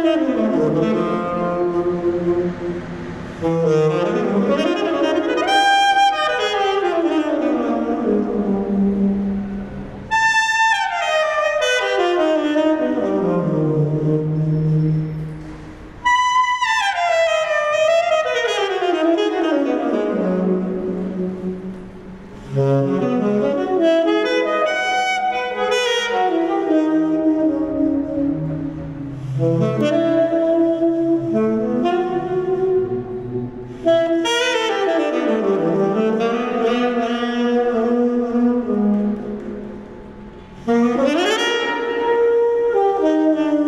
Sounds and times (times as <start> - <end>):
Inside, large room or hall: 0.0 - 43.6
Music: 0.0 - 43.6.